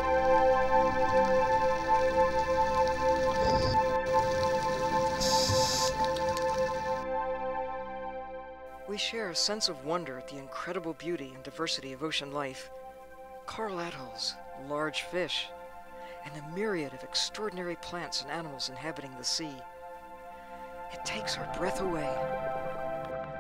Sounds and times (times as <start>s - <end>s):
Music: 0.0s - 23.4s
Speech: 8.9s - 12.7s, 13.5s - 15.5s, 16.2s - 19.6s, 20.9s - 22.2s.